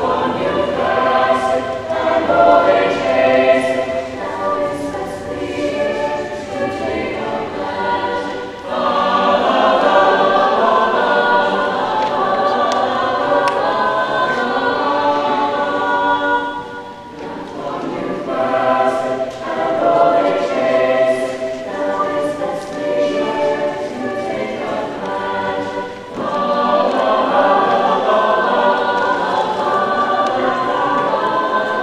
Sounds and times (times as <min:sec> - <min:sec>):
Music: 0:00.0 - 0:31.8.